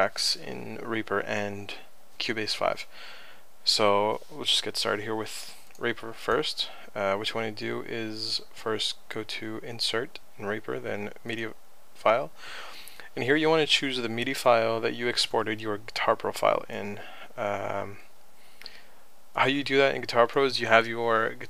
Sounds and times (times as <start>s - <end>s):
Speech: 0.0s - 2.9s, 3.6s - 12.4s, 13.1s - 18.1s, 19.4s - 21.4s.